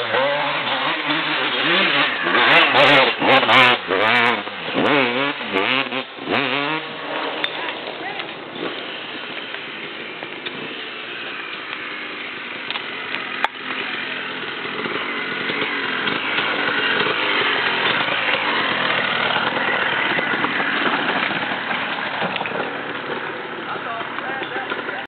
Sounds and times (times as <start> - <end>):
Speech: 7.6 - 8.4, 23.7 - 25.0.